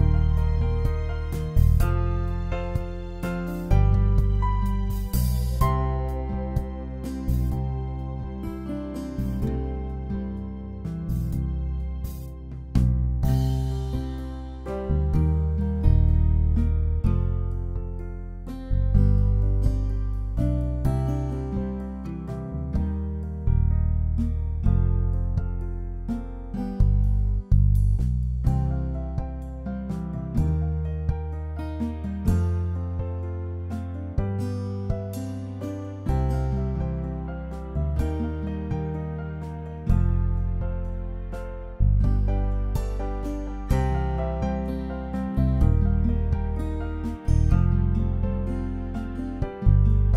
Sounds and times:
Music: 0.0s - 50.1s.

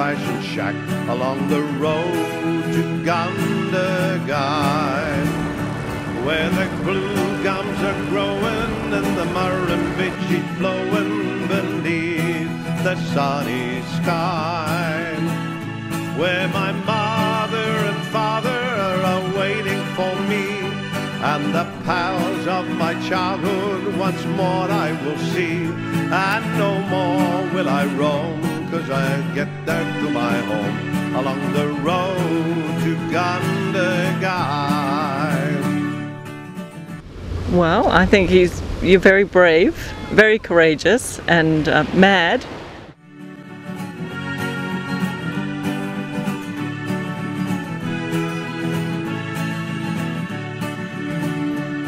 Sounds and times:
Music: 0.0s - 37.0s, 43.0s - 51.8s.

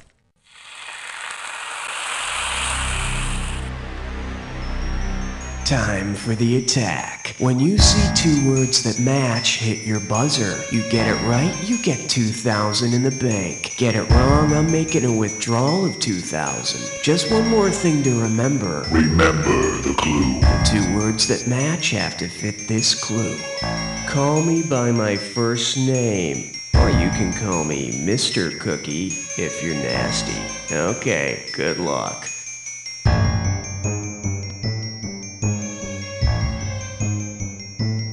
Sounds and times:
Speech: 5.6s - 23.5s, 24.1s - 32.4s
Soundtrack music: 18.9s - 21.1s.

